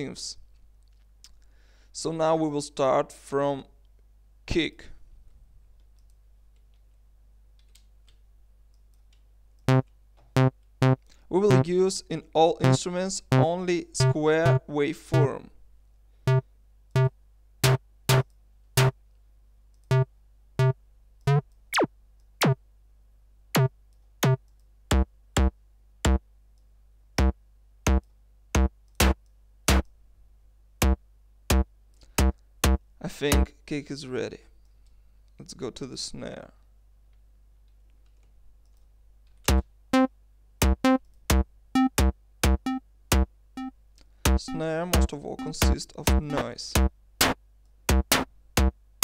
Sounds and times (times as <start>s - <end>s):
Speech: 0.0s - 0.4s, 2.0s - 3.8s, 4.5s - 5.0s, 11.3s - 15.6s, 33.0s - 34.5s, 35.4s - 36.7s, 44.4s - 46.8s.